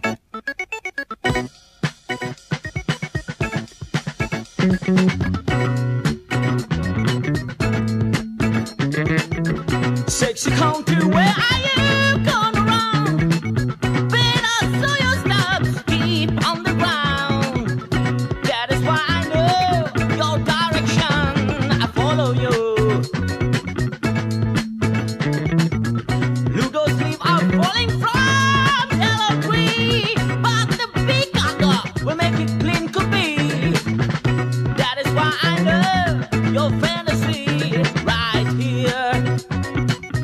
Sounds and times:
Music: 0:00.0 - 0:40.2.

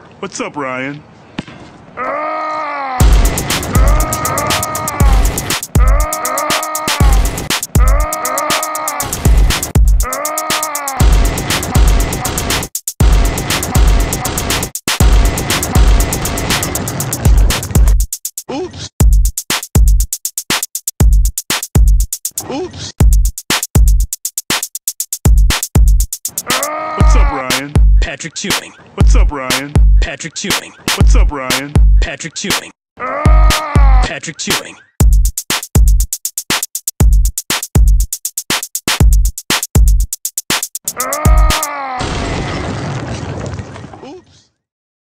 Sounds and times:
Speech: 0:00.2 - 0:01.0, 0:18.5 - 0:18.8, 0:22.4 - 0:22.9, 0:27.0 - 0:32.8, 0:34.0 - 0:34.9
Music: 0:03.0 - 0:22.4, 0:23.0 - 0:28.1, 0:29.0 - 0:32.6, 0:33.3 - 0:33.9, 0:35.0 - 0:41.7.

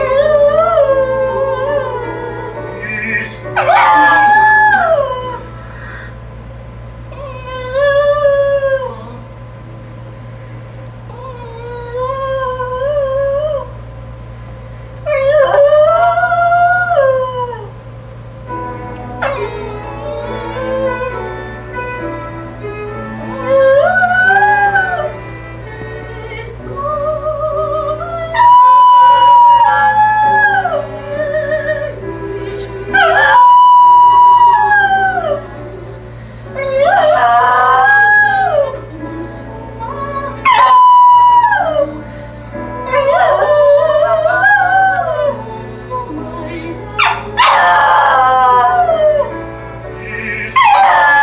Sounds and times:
Male singing: 0:00.0 - 0:05.0, 0:25.8 - 0:36.0, 0:36.6 - 0:43.5, 0:44.2 - 0:47.6, 0:50.0 - 0:51.2
Music: 0:00.0 - 0:51.2
Howl: 0:03.6 - 0:05.5, 0:28.2 - 0:31.6, 0:32.9 - 0:35.5, 0:36.6 - 0:38.8, 0:40.4 - 0:42.0, 0:42.9 - 0:45.5, 0:47.0 - 0:49.4, 0:50.4 - 0:51.2.

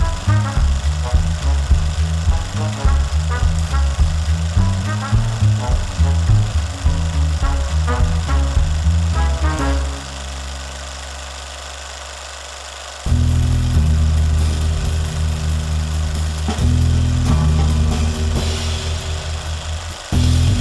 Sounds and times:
Vibration: 0:00.0 - 0:20.6.

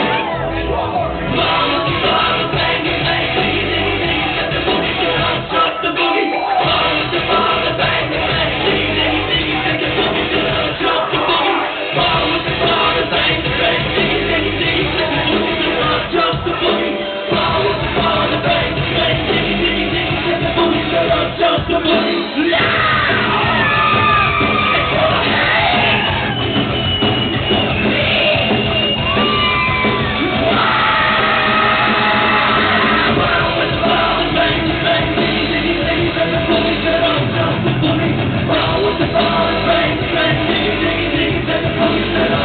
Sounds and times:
Inside, large room or hall: 0:00.0 - 0:42.4
Music: 0:00.0 - 0:42.4.

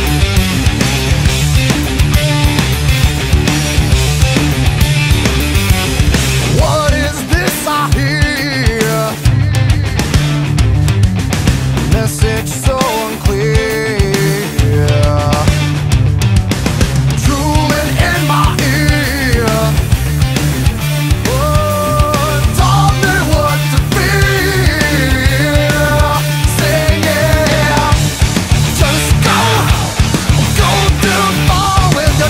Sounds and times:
Happy music: 0:00.0 - 0:32.2.

